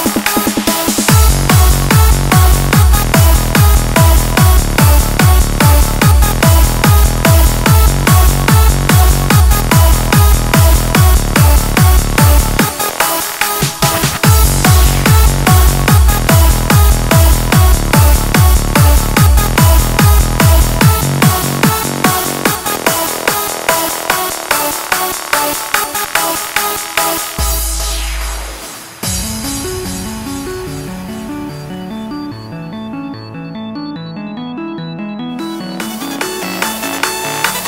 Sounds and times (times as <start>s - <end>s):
Techno: 0.0s - 37.6s.